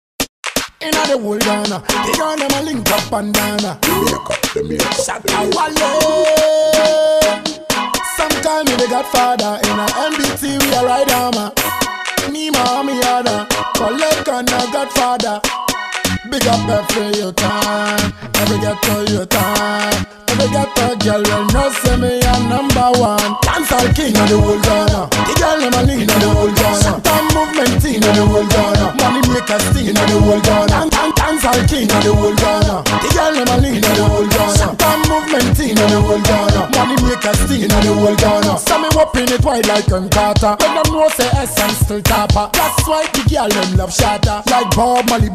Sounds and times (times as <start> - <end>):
Afrobeat: 0.5 - 45.3
Hip hop music: 0.8 - 45.3.